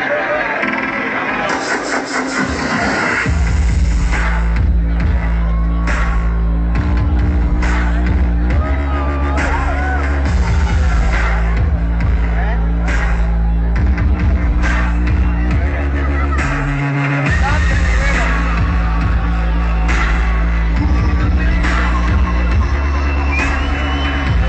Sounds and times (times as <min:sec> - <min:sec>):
Dubstep: 0:00.0 - 0:24.4
Speech: 0:17.2 - 0:18.6.